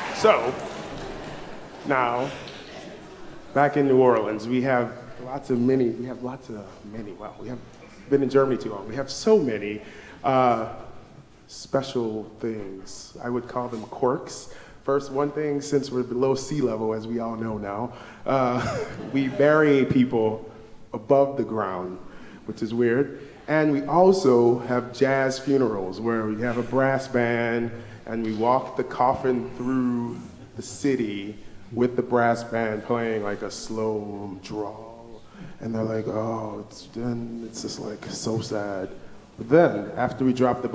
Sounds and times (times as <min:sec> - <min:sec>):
Speech: 0:00.0 - 0:00.6, 0:01.8 - 0:02.5, 0:03.5 - 0:40.7.